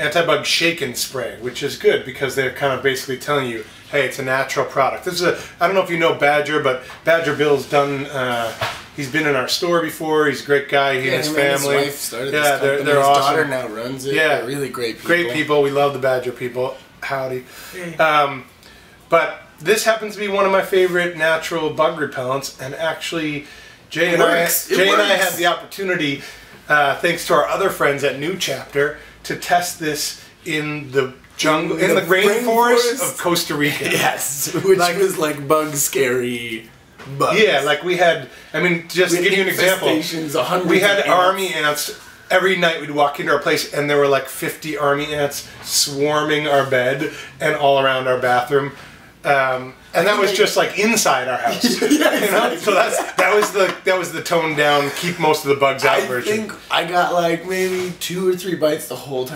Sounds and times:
Speech: 0:00.0 - 0:18.5, 0:19.1 - 0:59.3.

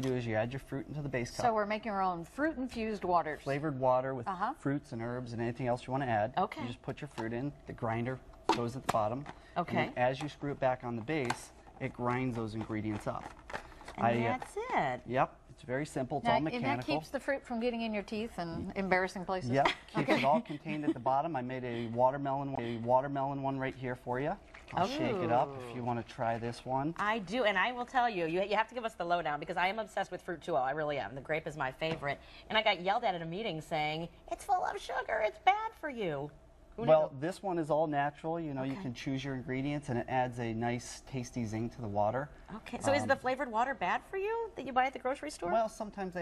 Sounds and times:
Speech: 0:09.6 - 0:10.0, 0:16.2 - 0:17.0, 0:24.8 - 0:26.1, 0:42.6 - 0:43.2.

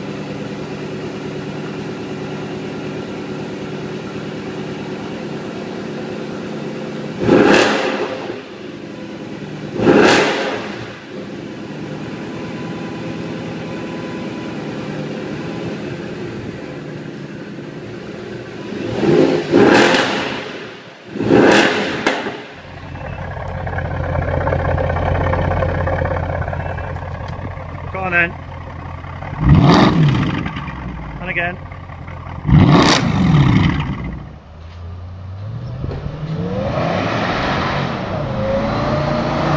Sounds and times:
Speech: 0:27.8 - 0:28.4, 0:31.2 - 0:31.6.

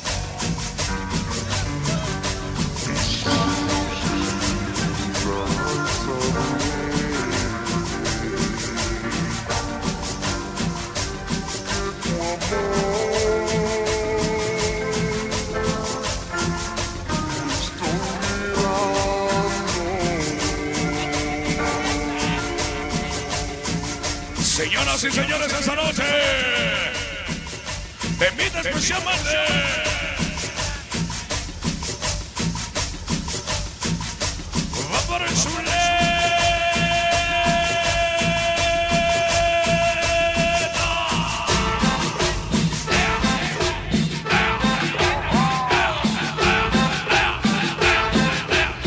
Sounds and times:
Music: 0:00.0 - 0:48.8.

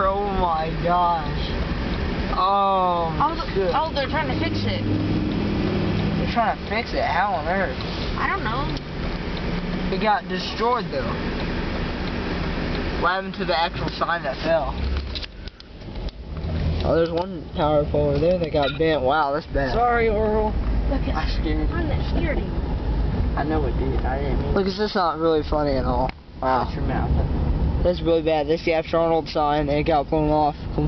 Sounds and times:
Car passing by: 0:03.0 - 0:13.6.

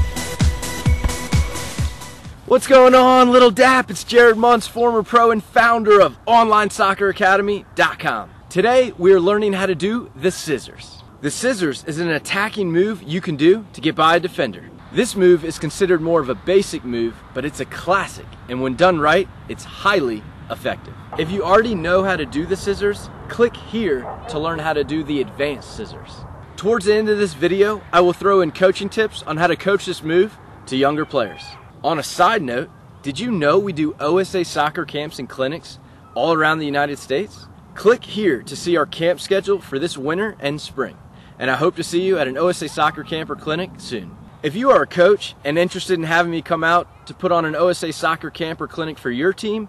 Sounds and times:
Speech: 0:02.5 - 0:49.6.

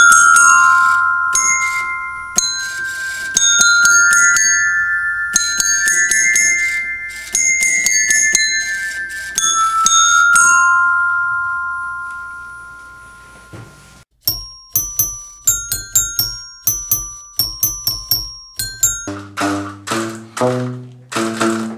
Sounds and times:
Glockenspiel: 0:00.0 - 0:19.4.

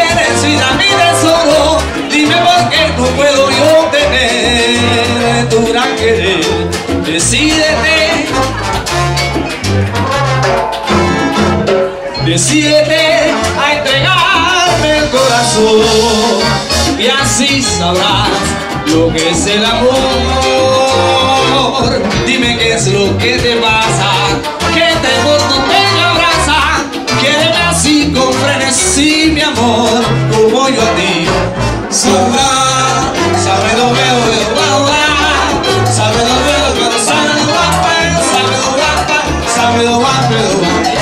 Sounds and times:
Salsa music: 0:00.0 - 0:41.0.

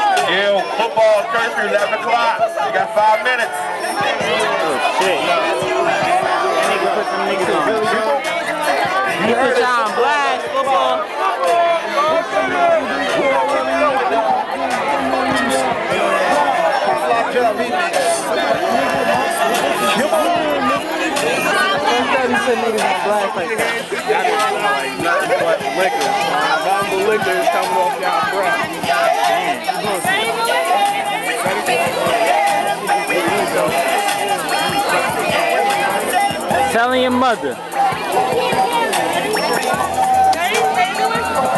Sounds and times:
Music: 0:00.0 - 0:41.5
Speech: 0:00.0 - 0:41.5.

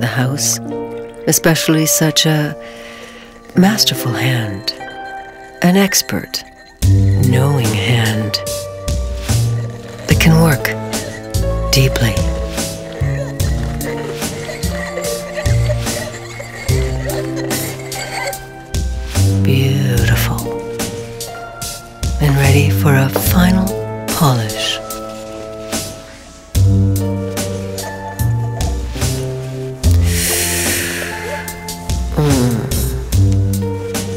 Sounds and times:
Music: 0:00.0 - 0:34.1
Speech: 0:07.2 - 0:08.4, 0:10.1 - 0:10.8, 0:11.7 - 0:12.3, 0:19.4 - 0:20.5, 0:22.2 - 0:24.8.

